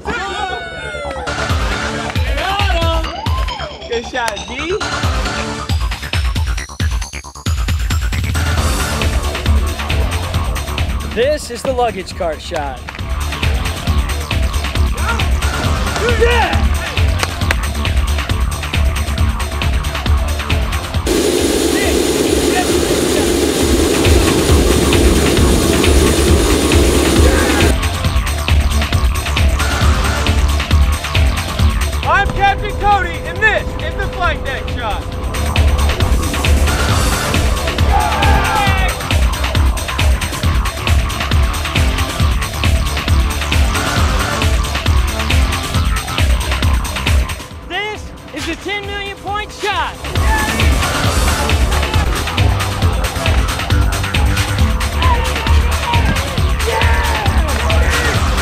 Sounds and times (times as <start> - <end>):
Music: 0.0 - 58.4
Fixed-wing aircraft, airplane: 20.6 - 28.2.